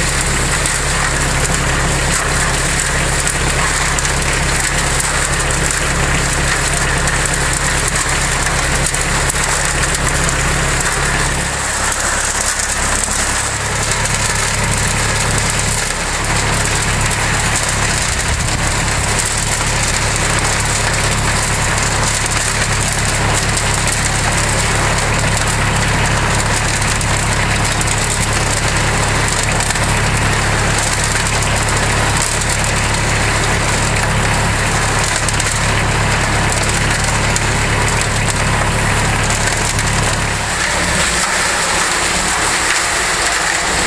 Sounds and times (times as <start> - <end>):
Outside, rural or natural: 0.0 - 43.8
Vehicle: 0.0 - 43.8.